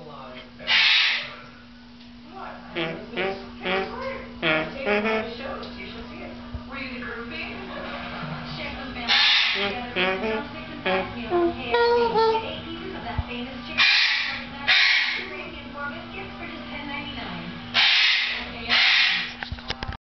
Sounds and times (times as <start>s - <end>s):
Speech: 2.3s - 17.6s.